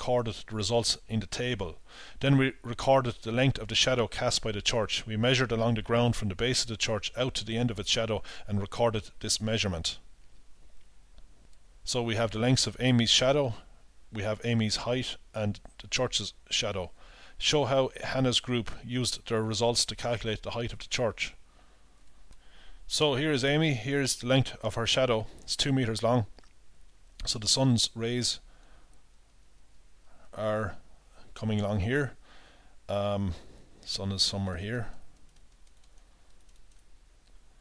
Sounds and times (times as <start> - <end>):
Speech: 0.0 - 10.0, 11.9 - 21.4, 22.9 - 26.3, 27.2 - 28.4, 30.4 - 30.8, 31.4 - 32.2, 32.9 - 35.0
Inside, small room: 0.0 - 37.6.